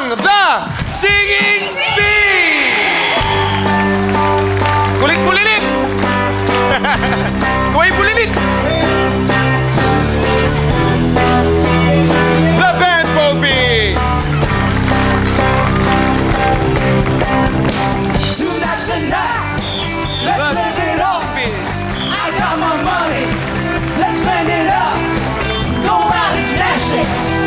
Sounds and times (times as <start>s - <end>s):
Music: 0.0s - 27.4s.